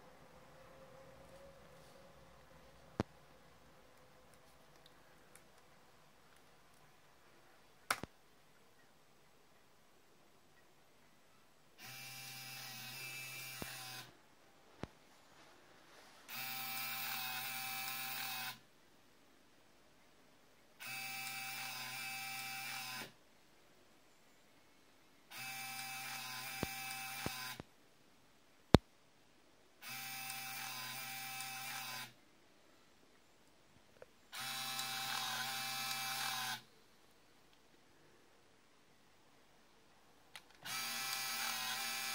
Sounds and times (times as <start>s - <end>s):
Printer: 16.3s - 18.6s, 25.3s - 27.6s, 29.8s - 32.1s, 34.4s - 36.6s, 40.6s - 42.1s.